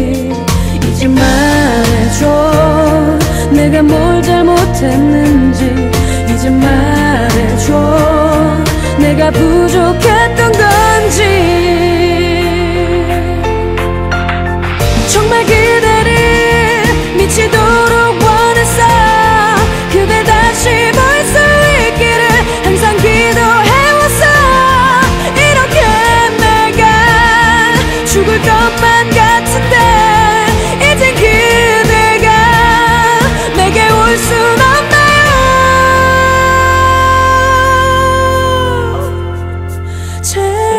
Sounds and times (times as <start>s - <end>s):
Music: 0.0s - 40.7s.